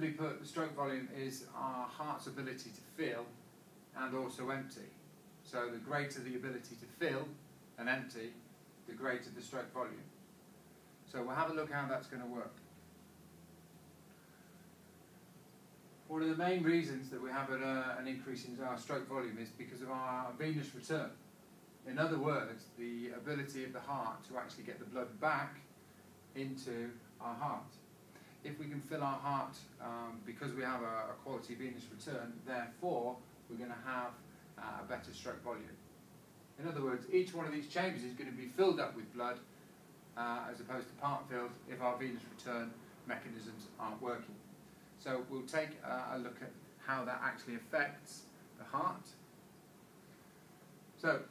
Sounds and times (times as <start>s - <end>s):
Speech: 0.0s - 10.1s, 11.1s - 12.6s, 16.1s - 21.2s, 21.8s - 25.7s, 26.3s - 35.8s, 36.6s - 39.5s, 40.2s - 44.4s, 45.0s - 49.3s, 51.0s - 51.3s.